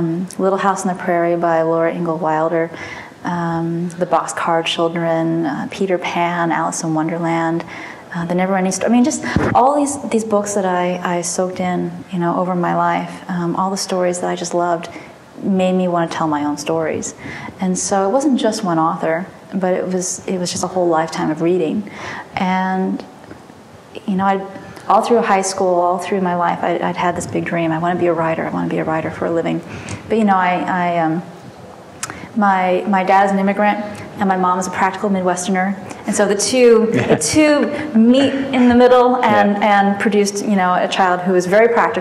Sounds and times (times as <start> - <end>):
Speech: 0.0 - 23.1, 24.0 - 31.3, 32.0 - 42.0.